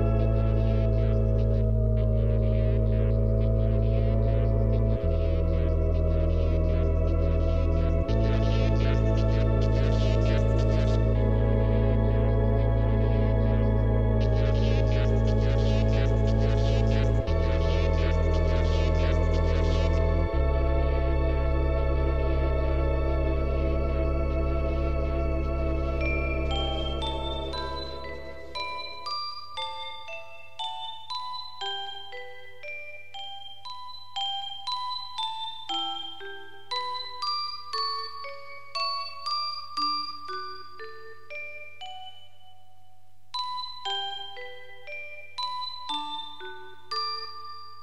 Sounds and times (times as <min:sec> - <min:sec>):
Glockenspiel: 0:05.0 - 0:47.8.